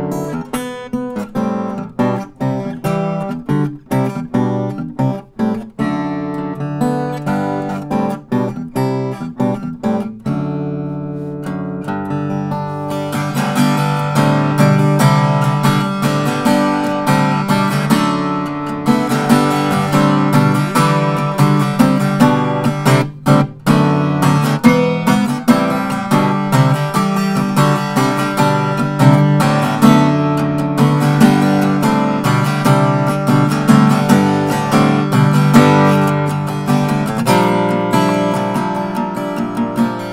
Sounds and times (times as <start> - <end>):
Acoustic guitar: 0.0 - 40.1
Strum: 0.0 - 40.1.